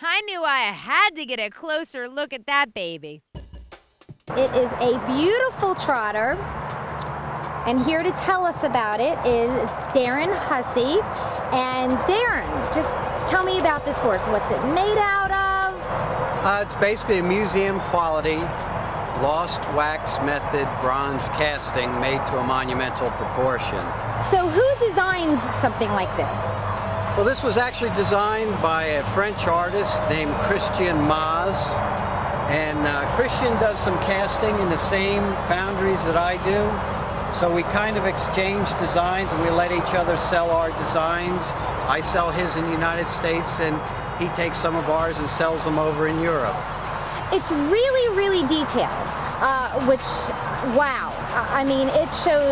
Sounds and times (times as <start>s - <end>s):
Music: 3.3s - 52.5s.